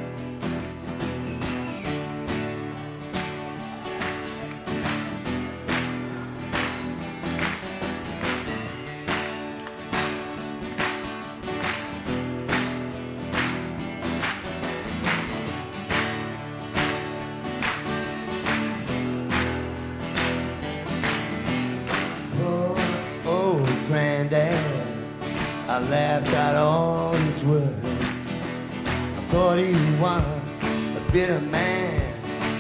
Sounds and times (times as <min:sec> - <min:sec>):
Music: 0:00.0 - 0:32.6.